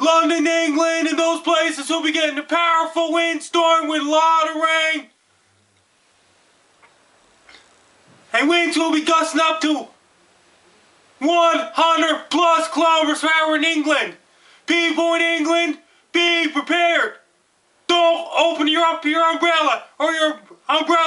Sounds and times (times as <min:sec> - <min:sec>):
Speech: 0:00.0 - 0:05.1, 0:08.3 - 0:10.0, 0:11.2 - 0:17.3, 0:17.9 - 0:21.0.